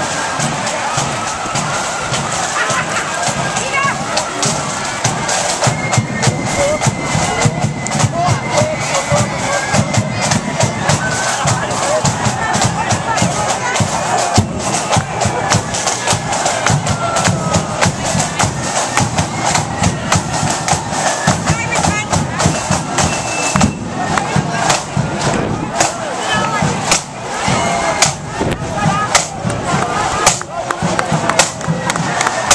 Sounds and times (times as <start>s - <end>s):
Speech: 0.0s - 4.7s, 6.0s - 19.3s, 21.2s - 32.5s
Music: 0.0s - 32.5s.